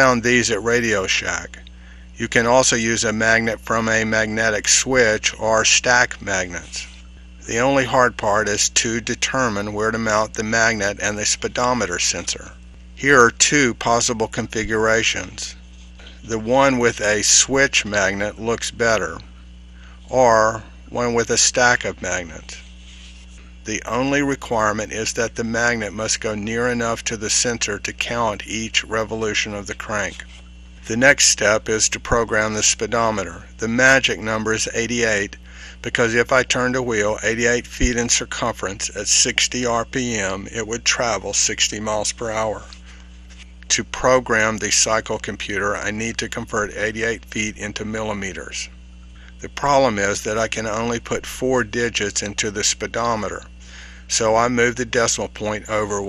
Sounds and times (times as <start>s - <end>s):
Speech: 0.0s - 19.3s, 20.0s - 22.6s, 23.7s - 42.8s, 43.7s - 48.8s, 49.4s - 56.0s.